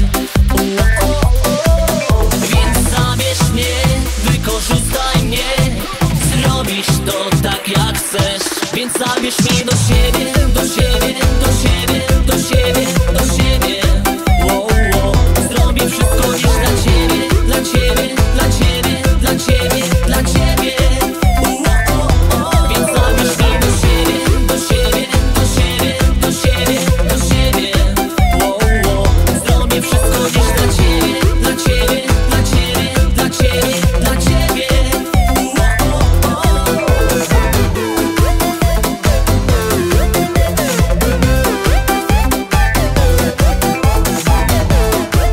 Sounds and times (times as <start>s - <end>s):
Dance music: 0.0s - 45.3s
Disco: 0.0s - 45.3s.